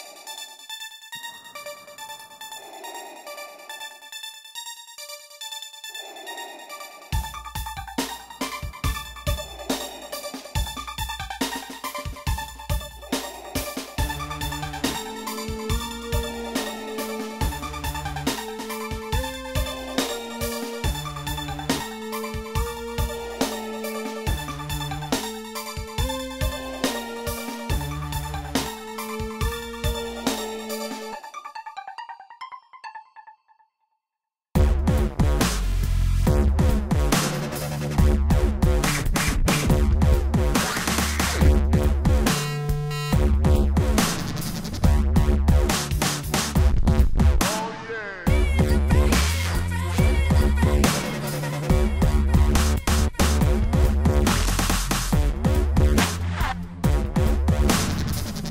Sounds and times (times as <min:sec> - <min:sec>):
Dubstep: 0:07.2 - 0:30.8, 0:34.6 - 0:58.5.